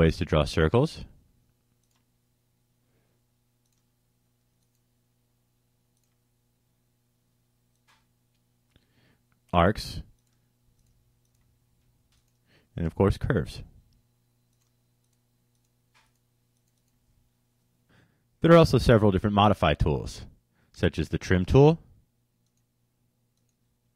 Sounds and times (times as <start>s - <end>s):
Speech: 0.0s - 1.2s, 9.5s - 10.1s, 12.8s - 13.8s, 18.4s - 21.9s.